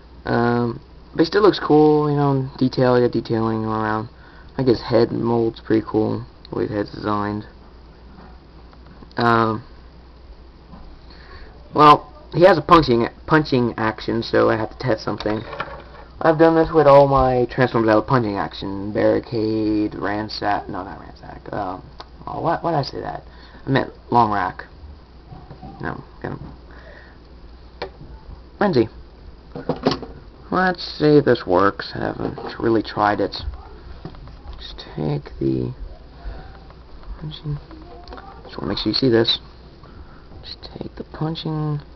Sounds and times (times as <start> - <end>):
Speech: 0.2 - 7.5, 11.7 - 15.5, 16.2 - 24.7, 30.5 - 33.8.